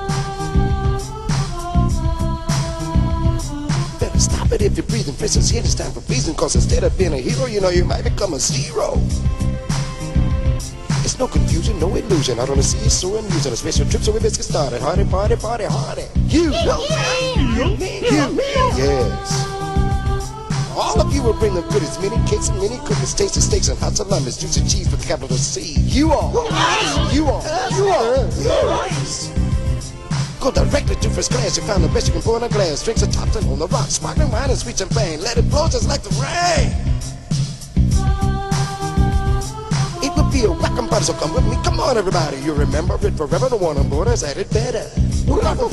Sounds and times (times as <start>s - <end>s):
Music: 0.0s - 45.7s.